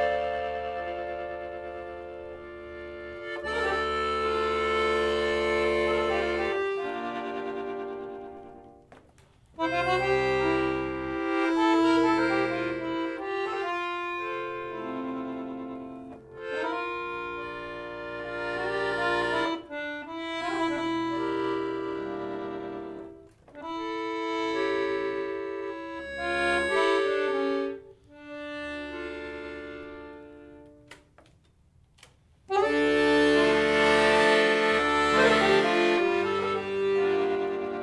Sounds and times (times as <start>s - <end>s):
Accordion: 0.0s - 37.8s.